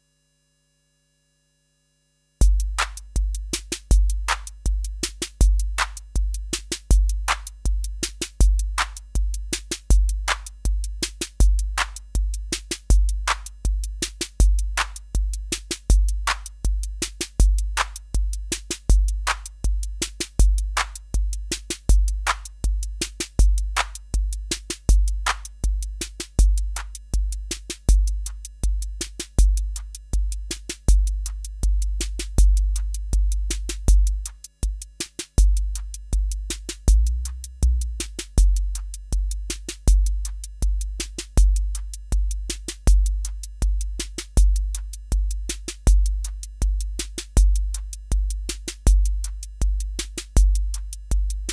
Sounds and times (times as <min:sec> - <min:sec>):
Drum machine: 0:02.4 - 0:51.5.